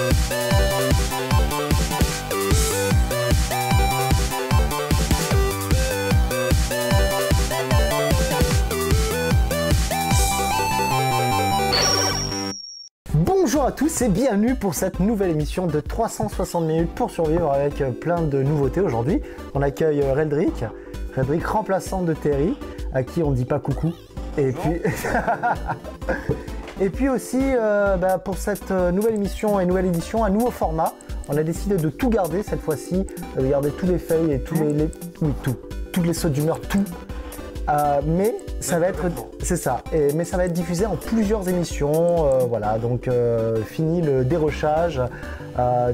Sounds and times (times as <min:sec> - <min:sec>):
Music: 0:00.0 - 0:12.5, 0:13.1 - 0:45.9
Speech: 0:13.1 - 0:24.9, 0:26.8 - 0:37.0, 0:37.7 - 0:45.9.